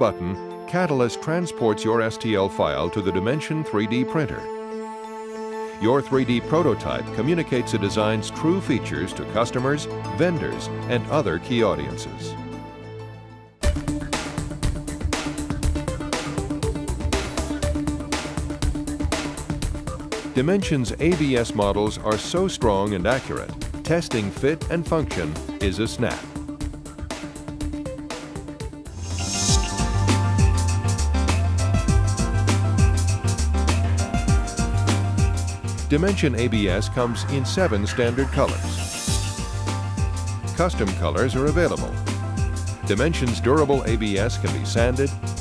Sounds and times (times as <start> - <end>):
Speech: 0.0 - 4.4, 5.8 - 12.4, 20.4 - 26.3, 35.9 - 38.8, 40.6 - 42.0, 42.9 - 45.2
Music: 0.0 - 45.4.